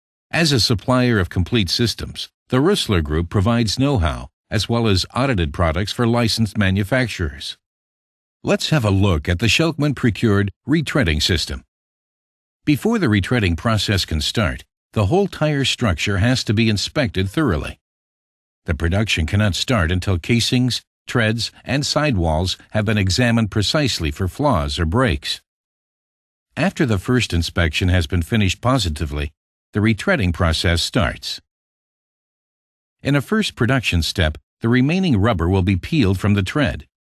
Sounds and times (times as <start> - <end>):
Speech synthesizer: 0.4 - 7.6, 8.5 - 11.7, 12.7 - 17.8, 18.7 - 25.4, 26.6 - 31.4, 33.0 - 36.9.